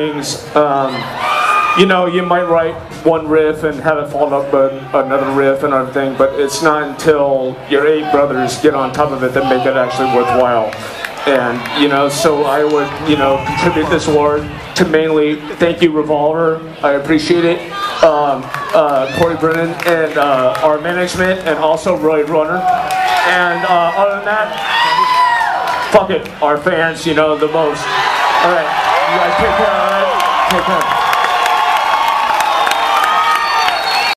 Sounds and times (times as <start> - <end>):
Male speech, man speaking: 0.0 - 1.1, 1.8 - 25.2, 25.9 - 30.9.